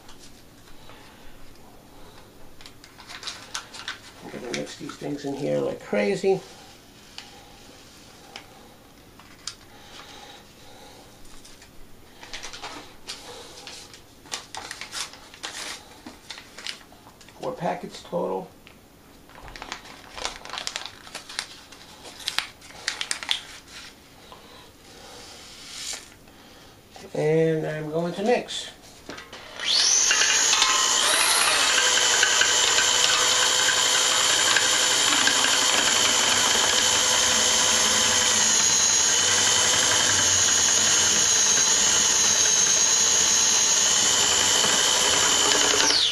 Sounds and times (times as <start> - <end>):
Inside, small room: 0.0 - 46.1.